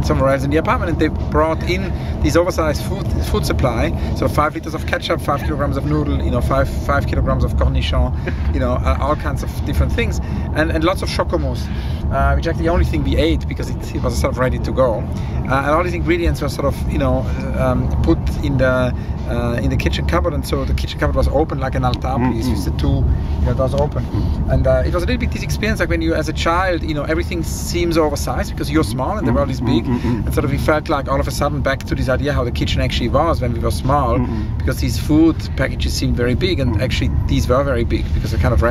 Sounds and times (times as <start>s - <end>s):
Car: 0.0s - 38.7s
Speech: 0.0s - 38.7s.